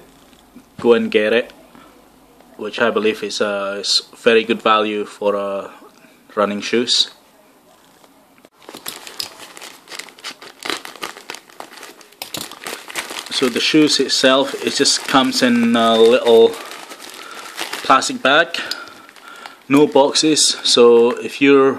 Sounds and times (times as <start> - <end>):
Speech: 0.8 - 8.4, 13.3 - 16.6, 17.8 - 18.8, 19.7 - 21.7.